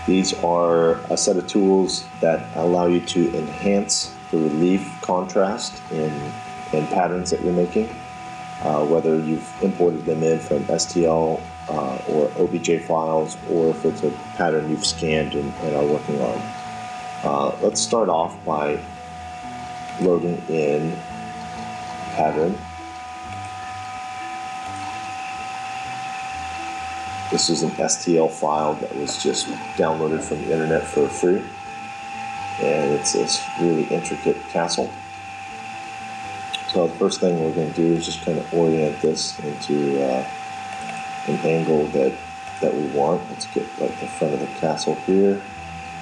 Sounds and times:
Music: 0:00.0 - 0:46.0
Speech: 0:00.1 - 0:08.0, 0:08.6 - 0:16.5, 0:17.2 - 0:18.8, 0:20.0 - 0:21.0, 0:22.1 - 0:22.6, 0:27.4 - 0:31.5, 0:32.6 - 0:35.0, 0:36.6 - 0:40.3, 0:41.3 - 0:45.5.

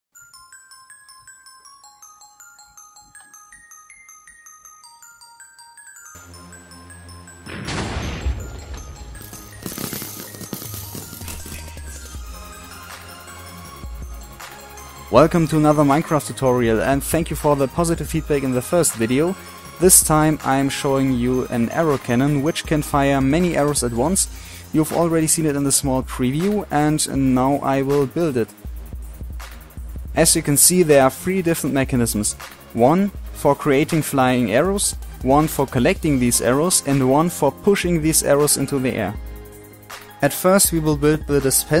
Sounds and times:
Music: 0:00.1 - 0:41.8
Arrow: 0:07.5 - 0:08.4.

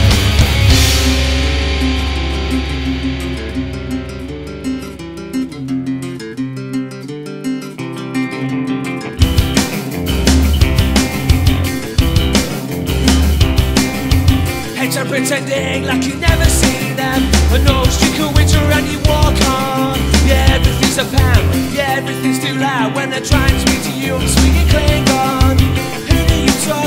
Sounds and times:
Music: 0:00.0 - 0:26.8.

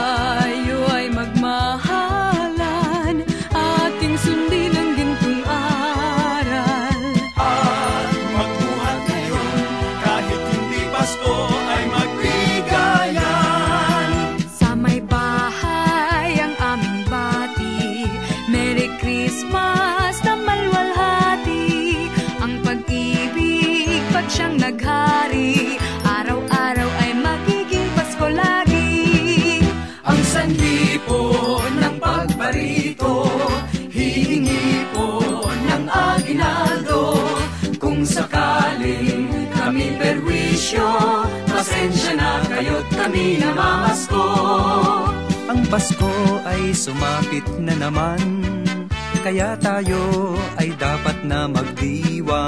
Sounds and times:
Music: 0:00.0 - 0:52.4.

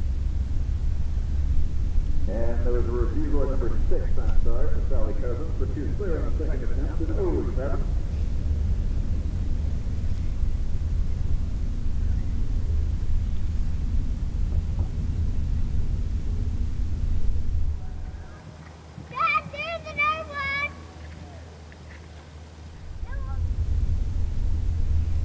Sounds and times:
Clip-clop: 0:00.9 - 0:23.4
Speech: 0:02.3 - 0:07.9, 0:19.1 - 0:20.8, 0:23.0 - 0:23.4.

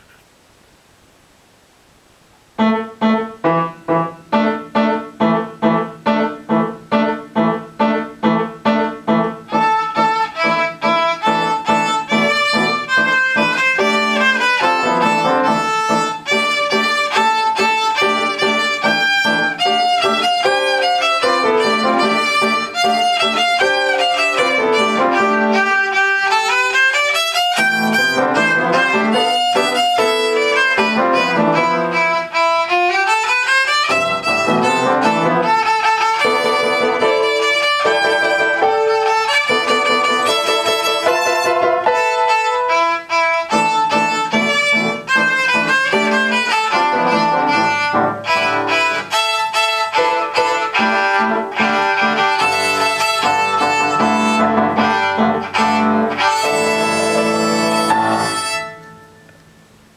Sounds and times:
Violin, fiddle: 0:09.2 - 0:58.9.

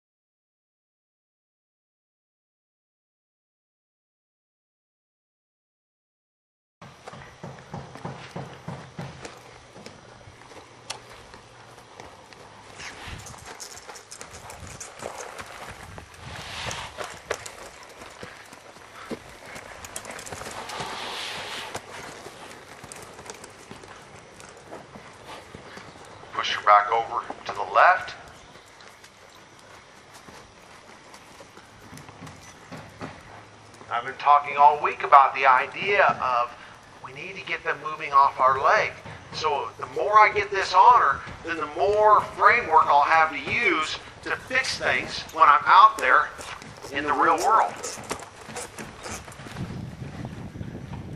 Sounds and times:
Clip-clop: 0:06.8 - 0:51.1
Speech: 0:26.4 - 0:28.2, 0:33.9 - 0:48.0.

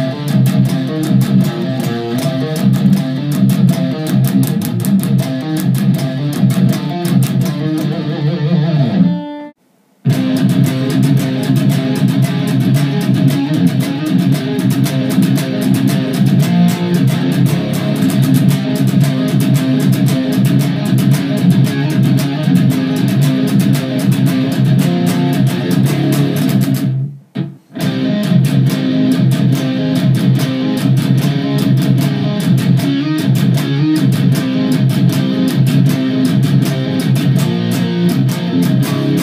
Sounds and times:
Electric guitar: 0:00.0 - 0:39.2.

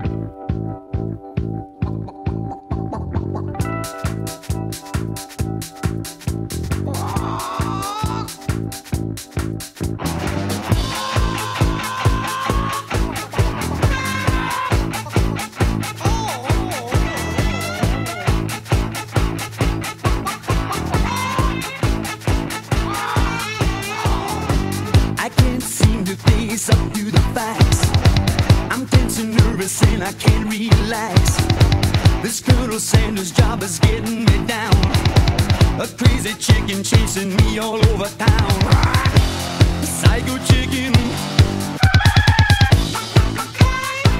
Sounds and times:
Music: 0:00.0 - 0:44.1.

